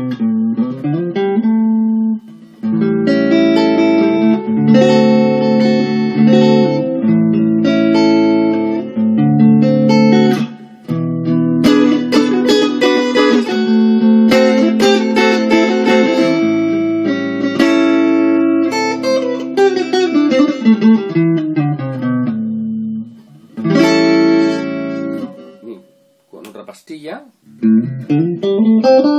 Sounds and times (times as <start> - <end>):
Music: 0.0 - 26.6, 27.4 - 29.1.